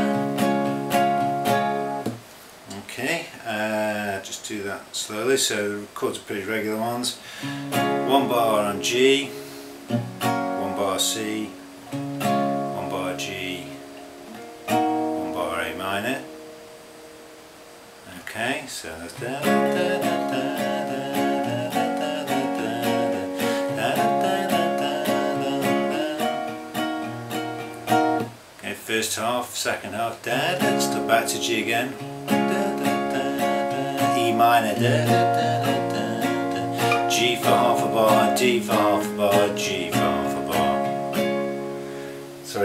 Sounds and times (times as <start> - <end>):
Music: 0.0 - 2.2, 7.4 - 18.0, 19.2 - 28.4, 30.3 - 42.6
Speech: 2.7 - 7.2, 8.1 - 9.3, 10.6 - 11.6, 15.2 - 16.3, 18.1 - 19.3, 28.6 - 32.0.